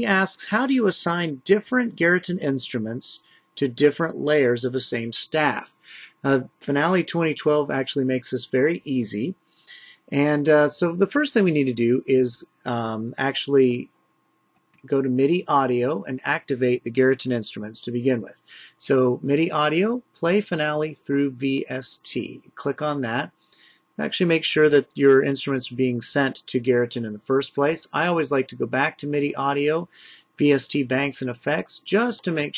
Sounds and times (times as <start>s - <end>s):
Speech: 0.0s - 13.9s, 14.9s - 32.5s.